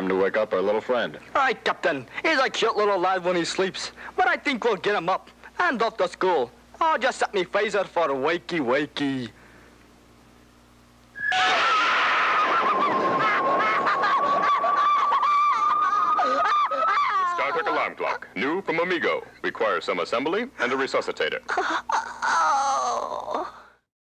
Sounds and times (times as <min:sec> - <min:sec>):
Speech: 0:00.0 - 0:09.4, 0:17.3 - 0:21.5.